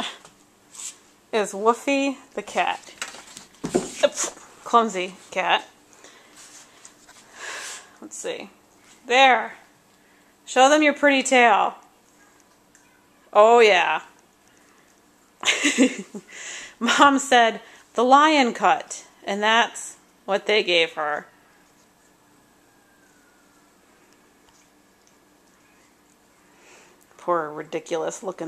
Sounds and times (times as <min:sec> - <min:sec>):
Speech: 0:01.4 - 0:02.9, 0:04.0 - 0:05.7, 0:08.0 - 0:08.5, 0:09.1 - 0:09.6, 0:10.5 - 0:12.4, 0:13.0 - 0:14.1, 0:16.8 - 0:21.3, 0:27.2 - 0:28.4.